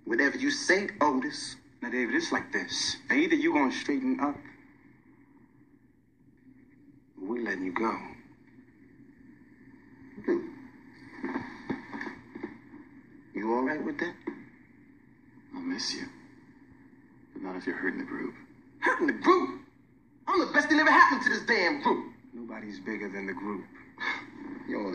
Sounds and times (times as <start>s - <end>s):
Speech: 0.0s - 4.6s, 7.2s - 8.2s, 13.3s - 14.2s, 15.5s - 16.2s, 17.4s - 19.6s, 20.3s - 23.8s, 24.6s - 24.9s
Inside, small room: 0.0s - 24.9s.